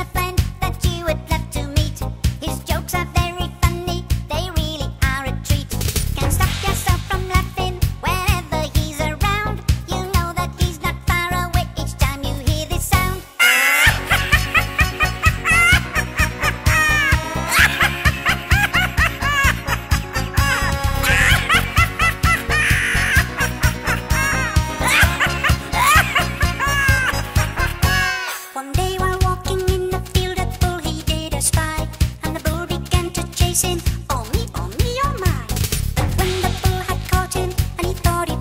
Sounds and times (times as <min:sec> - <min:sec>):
Music: 0:00.0 - 0:38.4
Snicker: 0:13.4 - 0:28.2.